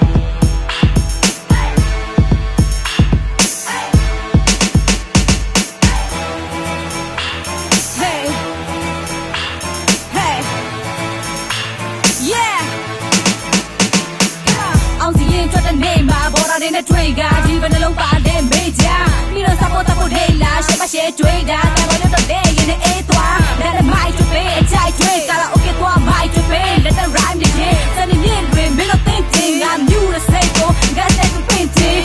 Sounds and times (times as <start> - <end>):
Soundtrack music: 0.0 - 32.0.